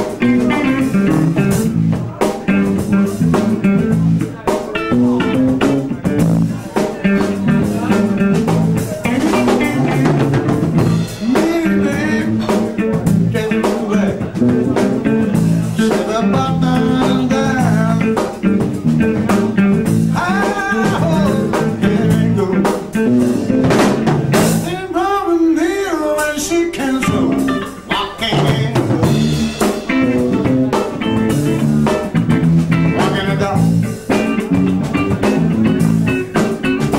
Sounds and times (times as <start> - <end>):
Music: 0.0 - 36.9
Speech: 0.0 - 36.9.